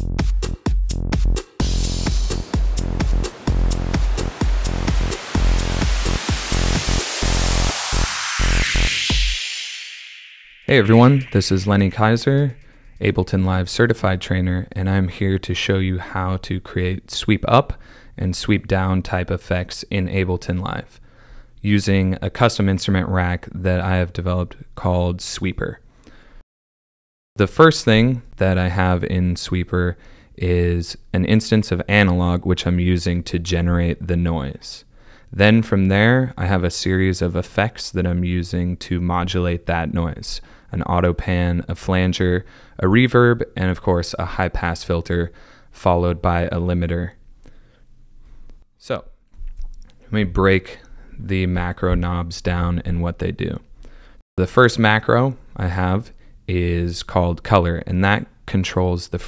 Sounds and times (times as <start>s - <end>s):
Speech: 10.7s - 21.0s, 21.6s - 25.8s, 27.4s - 47.2s, 48.8s - 49.2s, 50.1s - 53.7s, 54.4s - 59.2s.